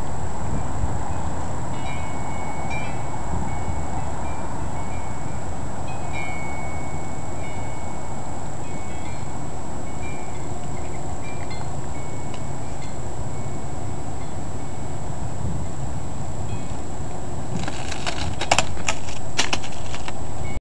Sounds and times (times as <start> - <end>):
Breaking: 17.6 - 20.2.